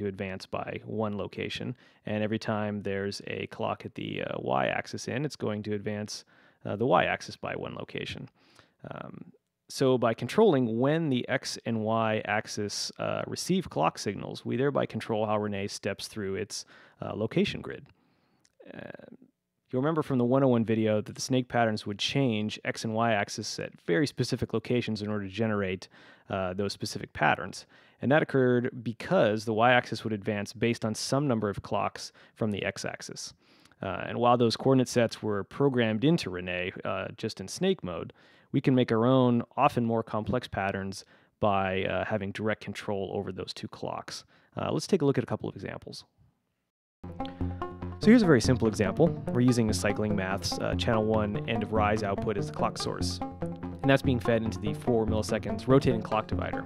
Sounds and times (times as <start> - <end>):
Speech: 0.0 - 17.9, 18.6 - 46.1, 48.0 - 53.2, 53.9 - 56.6.